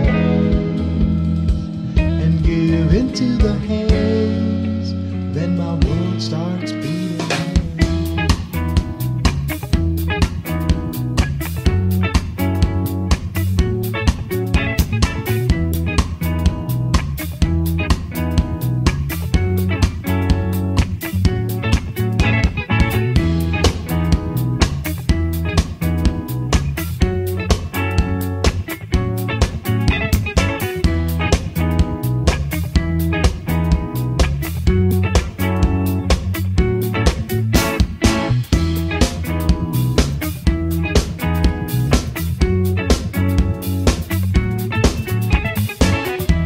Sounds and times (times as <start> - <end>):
Music: 0.0 - 46.4.